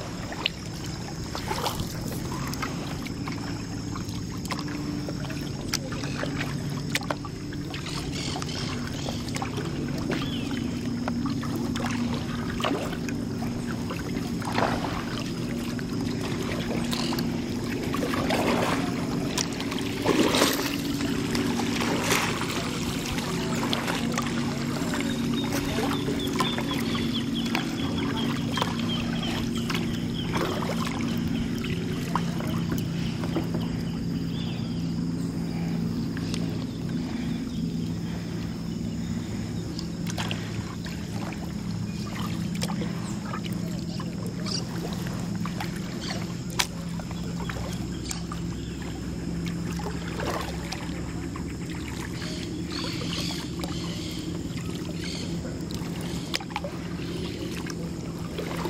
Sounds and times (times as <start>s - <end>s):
Rowboat, canoe, kayak: 0.0s - 58.6s.